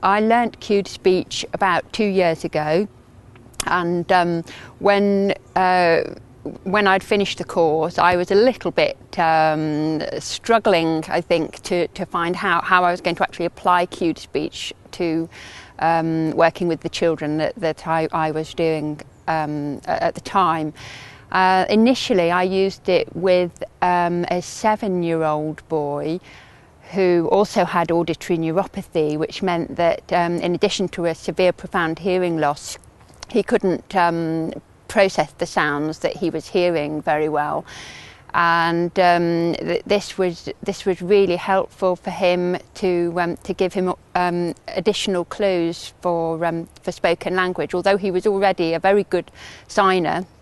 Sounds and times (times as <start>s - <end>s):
Female speech, woman speaking: 0.0s - 2.9s, 3.6s - 26.2s, 26.9s - 37.7s, 38.3s - 50.3s.